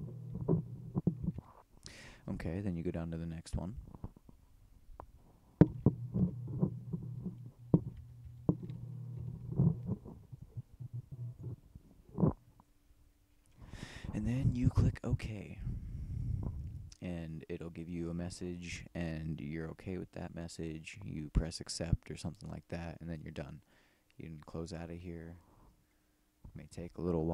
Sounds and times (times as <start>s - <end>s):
Speech: 2.2s - 3.8s, 14.1s - 15.8s, 17.0s - 23.6s, 24.2s - 25.4s, 26.5s - 27.3s.